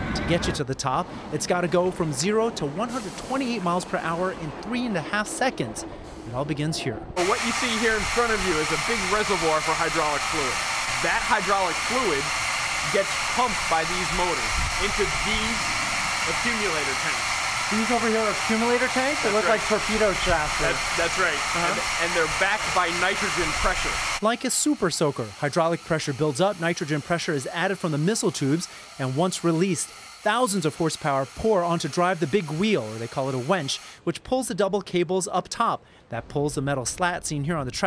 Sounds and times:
Speech: 0.0 - 12.3, 12.9 - 15.6, 16.3 - 37.8.

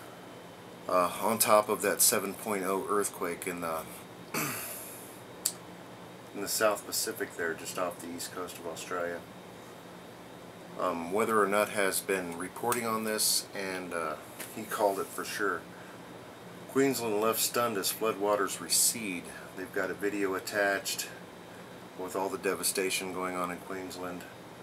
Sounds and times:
Speech: 0.9 - 4.0, 6.3 - 9.3, 10.8 - 15.6, 16.7 - 21.2, 22.0 - 24.4.

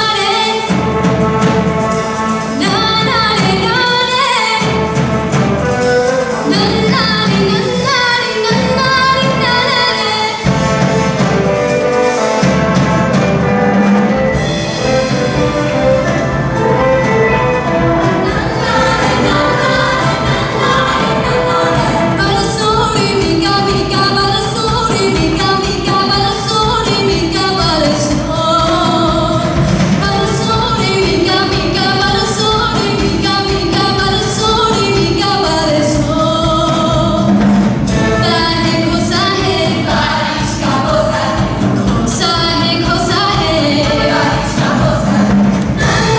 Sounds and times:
Music: 0.0 - 46.1
Female singing: 2.6 - 4.8, 6.5 - 10.5, 18.2 - 37.4, 38.0 - 46.1.

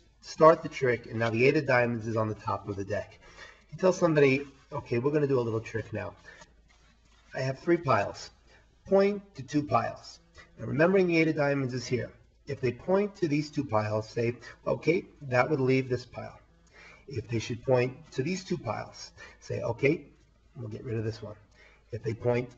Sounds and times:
Speech: 0.2 - 6.3, 7.3 - 16.4, 17.1 - 21.4, 22.0 - 22.5.

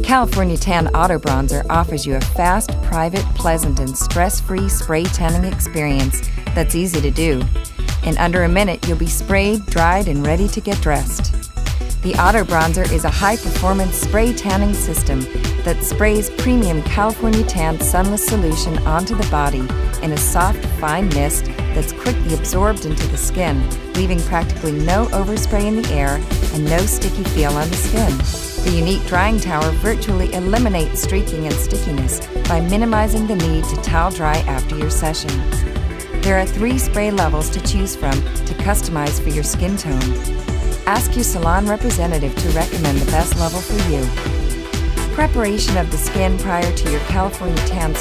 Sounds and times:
Speech: 0.0 - 11.3, 12.0 - 35.4, 36.3 - 40.2, 40.9 - 44.3, 45.2 - 48.0
Music: 0.0 - 48.0.

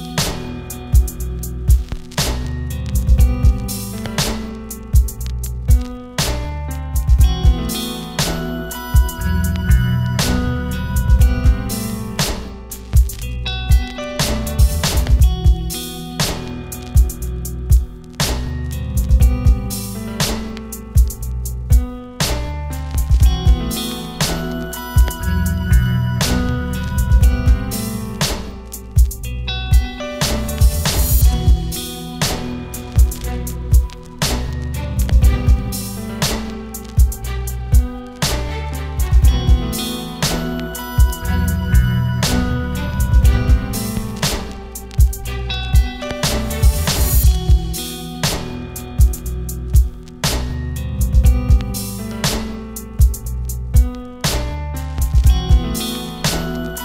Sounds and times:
Strum: 0.0 - 56.8.

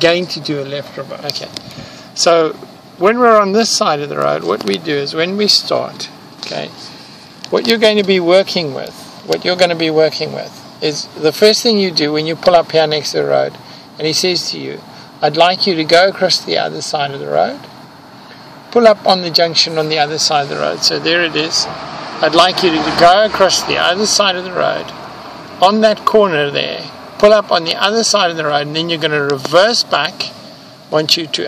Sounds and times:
Speech: 0.0 - 1.6, 2.2 - 6.9, 7.5 - 17.7, 18.7 - 25.0, 25.6 - 31.4
Car: 0.0 - 31.4.

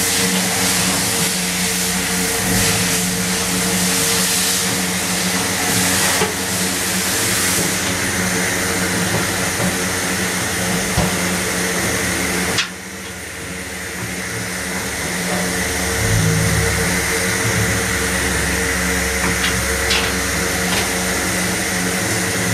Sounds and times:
Engine: 0.0 - 22.5.

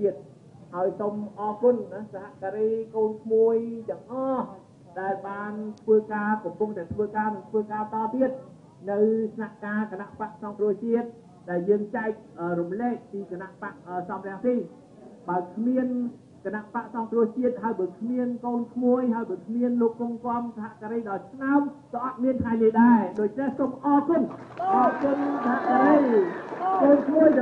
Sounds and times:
Narration, monologue: 0.0 - 27.4
Male speech, man speaking: 0.8 - 27.4.

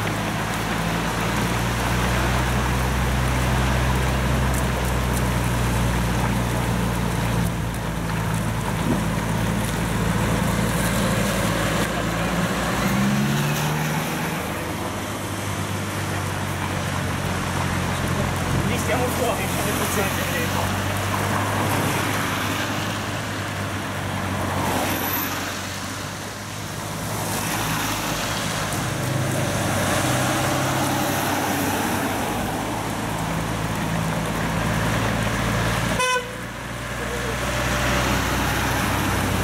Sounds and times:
Traffic noise, roadway noise: 0.0 - 39.4.

